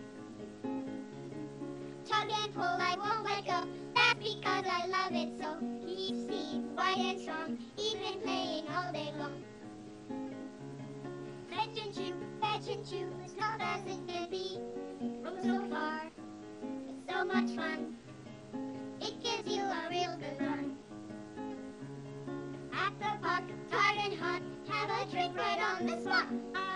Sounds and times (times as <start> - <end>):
Music: 0.0 - 26.7.